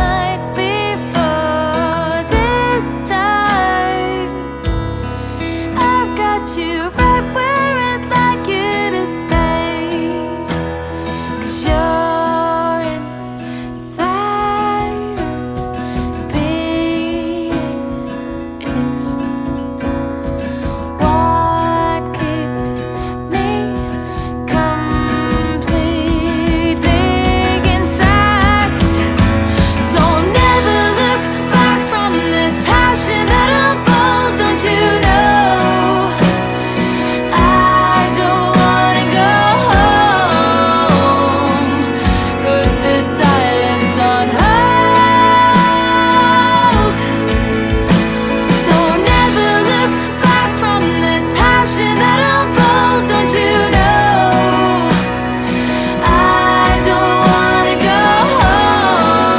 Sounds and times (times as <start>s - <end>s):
Music: 0.0s - 59.3s.